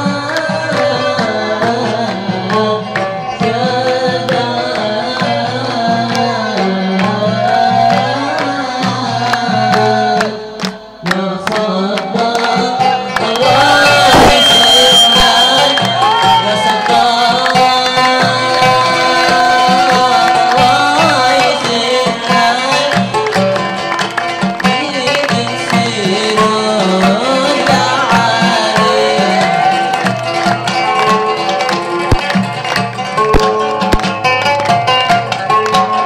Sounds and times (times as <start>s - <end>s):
Music: 0.0s - 36.0s.